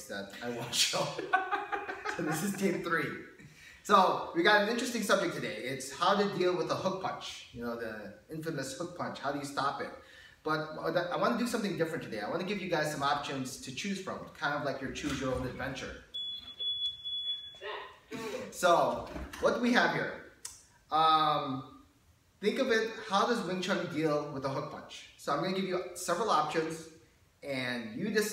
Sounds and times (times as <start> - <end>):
Smoke detector, smoke alarm: 16.1 - 17.7.